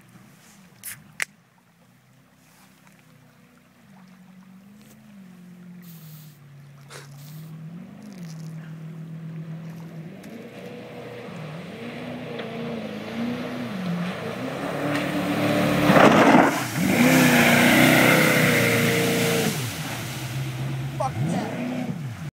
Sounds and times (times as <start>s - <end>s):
Motorboat, speedboat: 0.0s - 22.3s
Speech: 21.0s - 21.9s.